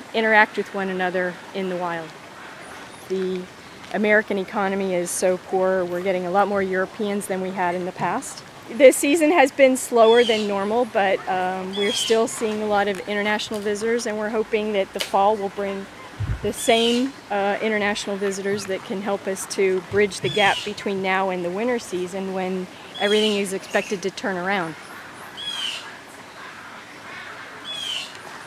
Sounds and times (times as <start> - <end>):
Speech: 0.1 - 2.1, 3.1 - 24.8.